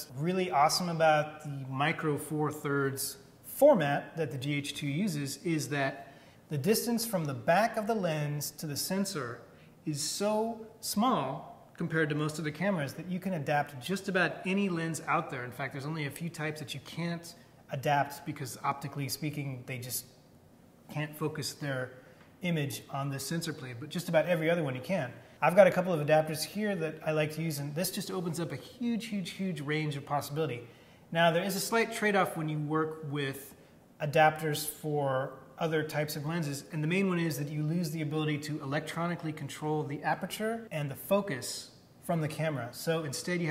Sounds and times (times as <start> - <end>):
Speech: 0.0 - 20.2, 20.9 - 43.5.